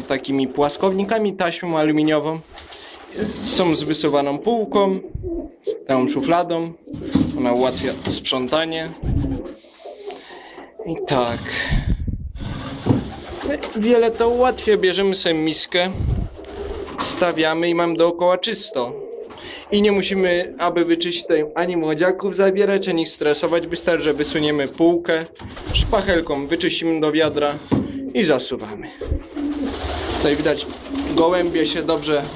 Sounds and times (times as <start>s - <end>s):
Speech: 0.0s - 2.5s, 3.2s - 5.1s, 5.9s - 9.0s, 10.8s - 11.8s, 13.4s - 16.0s, 17.0s - 19.0s, 19.7s - 27.6s, 28.2s - 29.0s, 30.2s - 32.3s.